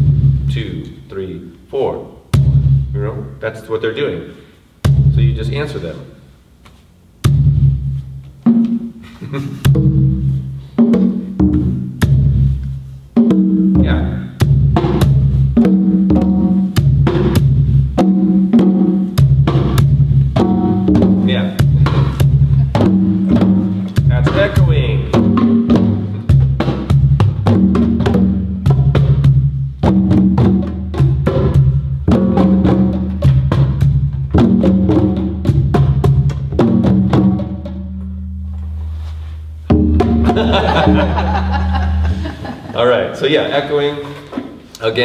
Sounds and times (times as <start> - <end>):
Drum: 0.0 - 0.8, 2.2 - 3.4, 4.8 - 5.8, 7.1 - 38.2, 39.6 - 42.8
Speech: 0.5 - 2.2, 3.0 - 4.5, 5.1 - 6.2, 13.8 - 14.4, 21.2 - 21.6, 24.1 - 25.2, 42.7 - 44.2, 44.8 - 45.0.